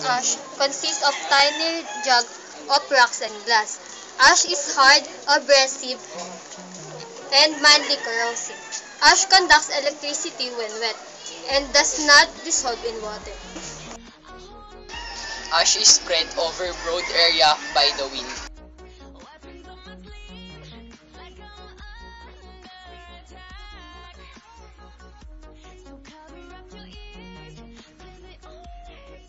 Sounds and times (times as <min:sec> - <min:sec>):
Speech: 0:00.0 - 0:14.0, 0:15.5 - 0:18.5
Music: 0:00.0 - 0:29.2.